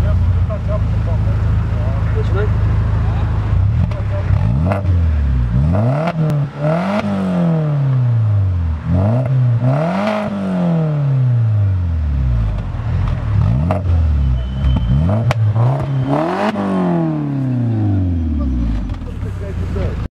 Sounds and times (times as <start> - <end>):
Speech: 0.0 - 4.4, 18.4 - 20.1.